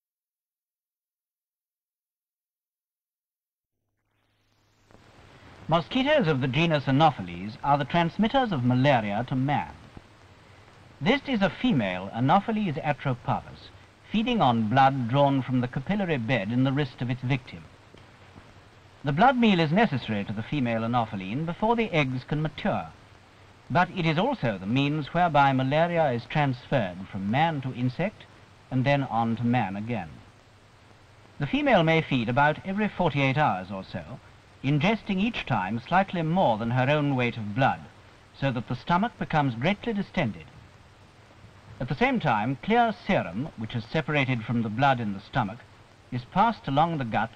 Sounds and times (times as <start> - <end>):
Speech: 5.7 - 9.9, 11.0 - 17.7, 19.0 - 23.0, 23.7 - 30.3, 31.4 - 40.6, 41.8 - 47.3.